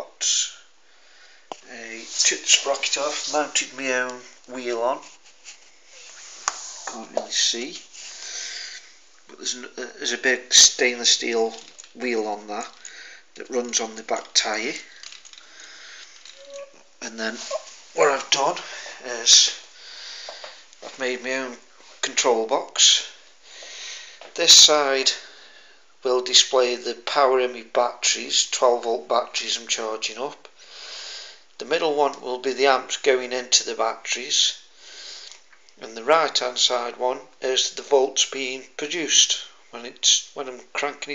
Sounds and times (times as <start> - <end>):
Speech: 0.0 - 0.7, 1.6 - 5.1, 6.9 - 7.9, 9.3 - 12.8, 13.4 - 14.9, 17.0 - 19.7, 20.9 - 23.2, 24.4 - 25.3, 26.0 - 30.5, 31.6 - 34.7, 35.8 - 41.1.